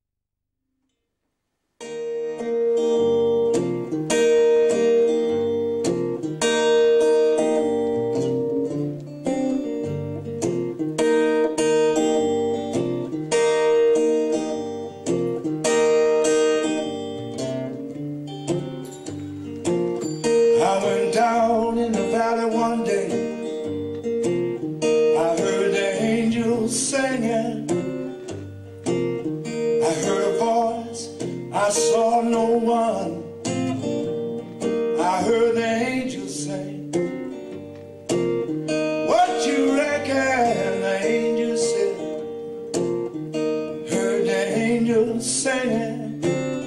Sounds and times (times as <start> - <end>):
Music: 0.8 - 46.6
Male singing: 20.6 - 23.4, 25.2 - 27.9, 29.8 - 33.3, 35.0 - 36.9, 39.0 - 42.2, 43.9 - 46.4.